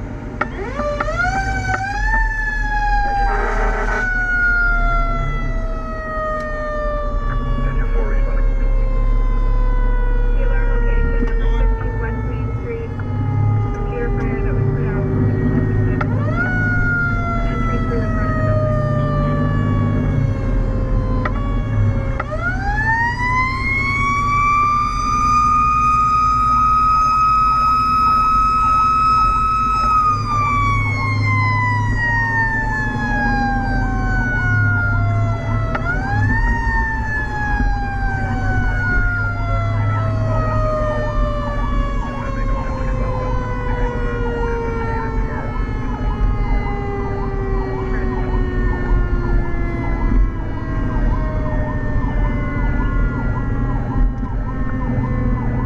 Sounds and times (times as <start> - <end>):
Fire engine, fire truck (siren): 0.0 - 55.6
Truck: 0.0 - 55.6
Speech: 7.3 - 8.7, 10.3 - 13.0, 13.8 - 16.5, 17.4 - 18.5.